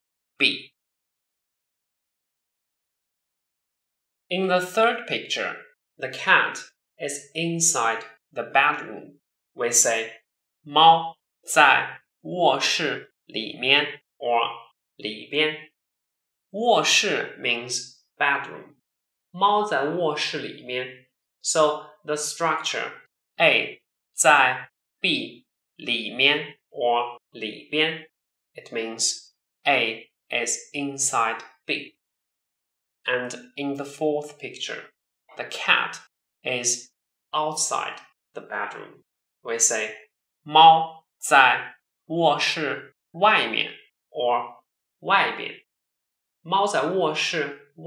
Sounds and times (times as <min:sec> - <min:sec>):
Speech: 0:00.4 - 0:00.6, 0:04.3 - 0:15.7, 0:16.6 - 0:18.7, 0:19.4 - 0:32.0, 0:33.1 - 0:36.8, 0:37.4 - 0:45.6, 0:46.5 - 0:47.8.